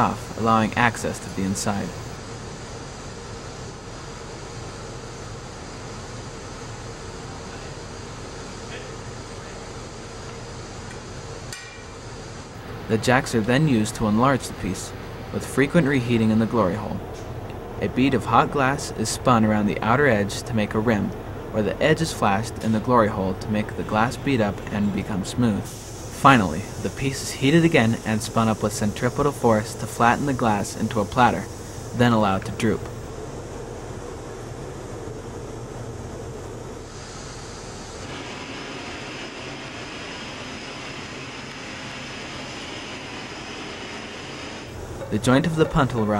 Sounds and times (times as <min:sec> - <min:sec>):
Speech: 0:00.0 - 0:02.0, 0:12.9 - 0:17.0, 0:17.8 - 0:33.0, 0:45.0 - 0:46.1.